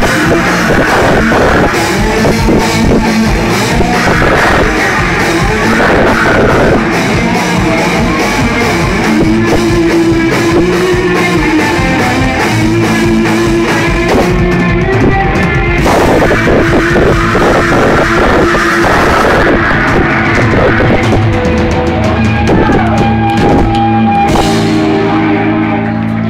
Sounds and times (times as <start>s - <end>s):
Rock music: 0.0s - 26.2s.